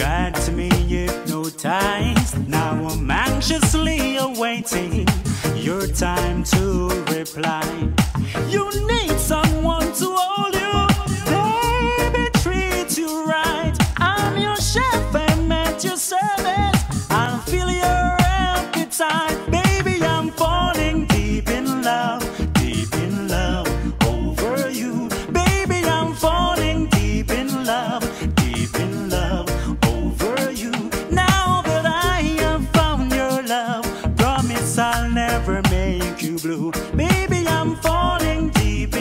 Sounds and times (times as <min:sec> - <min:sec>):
Happy music: 0:00.0 - 0:39.0.